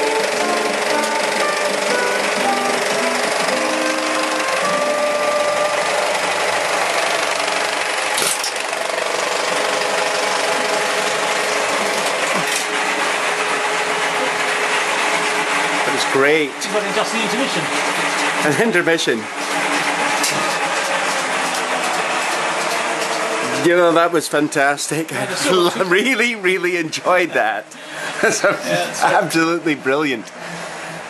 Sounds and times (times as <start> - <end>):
Music: 0.0 - 6.4
Engine: 0.0 - 31.1.